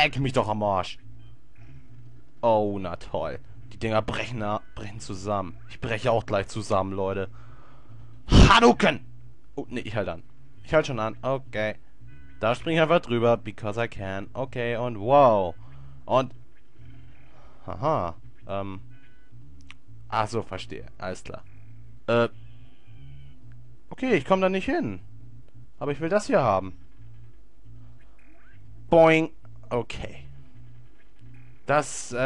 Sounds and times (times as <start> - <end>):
Speech: 0.0 - 1.0, 2.4 - 7.3, 8.3 - 9.0, 9.6 - 11.8, 12.4 - 16.3, 17.7 - 18.8, 20.1 - 21.4, 22.1 - 22.3, 24.0 - 25.0, 25.8 - 26.8, 29.0 - 30.3, 31.7 - 32.2.